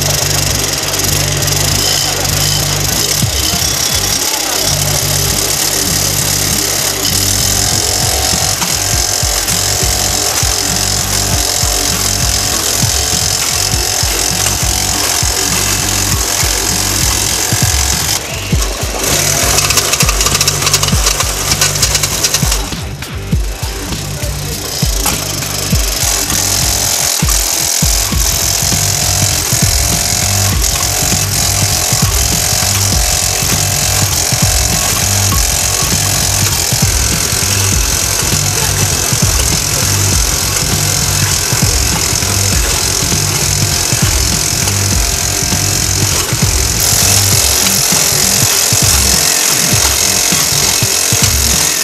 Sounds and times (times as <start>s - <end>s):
Music: 0.0s - 51.8s.